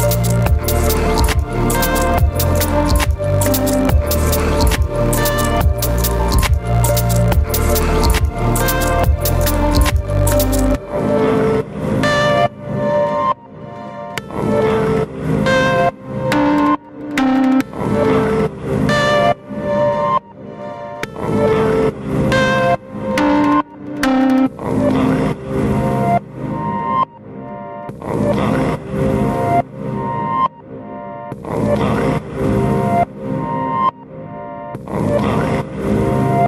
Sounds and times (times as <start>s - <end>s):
Music: 0.0s - 36.4s.